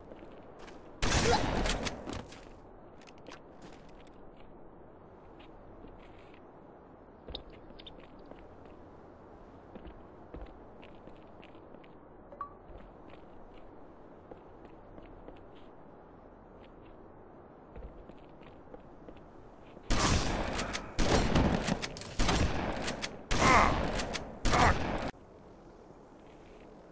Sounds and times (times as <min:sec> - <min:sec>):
Gunshot, gunfire: 0:01.0 - 0:01.8, 0:19.9 - 0:21.6.